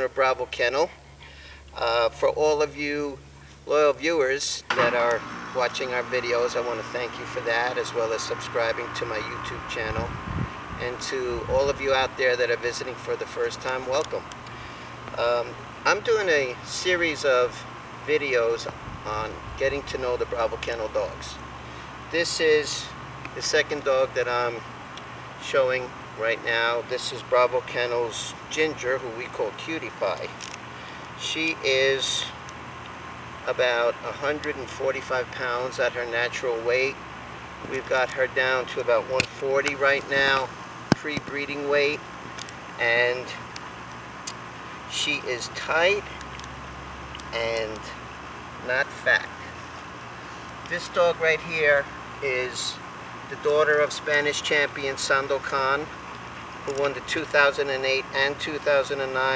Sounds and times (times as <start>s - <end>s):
Speech: 0.0s - 1.0s, 1.8s - 10.1s, 10.8s - 14.2s, 15.2s - 21.4s, 22.1s - 24.6s, 25.4s - 30.4s, 31.2s - 32.4s, 33.4s - 37.0s, 37.7s - 42.0s, 42.8s - 43.4s, 44.9s - 46.1s, 47.3s - 48.0s, 48.6s - 49.5s, 50.7s - 55.9s, 56.7s - 59.3s.